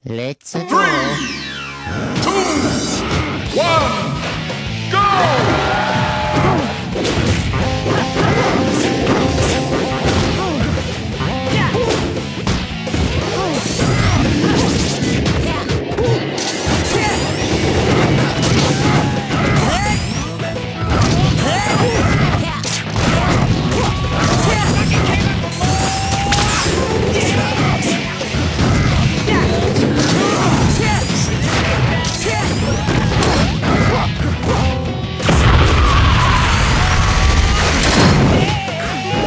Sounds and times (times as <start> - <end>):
Music: 0.7 - 39.2
Smash, crash: 11.5 - 38.6.